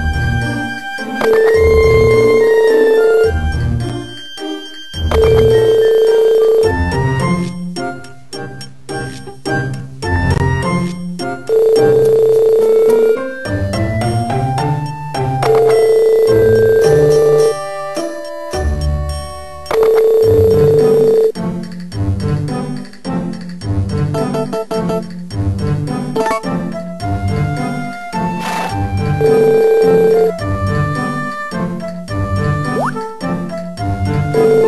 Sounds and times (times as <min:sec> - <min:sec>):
Music: 0:00.0 - 0:34.6.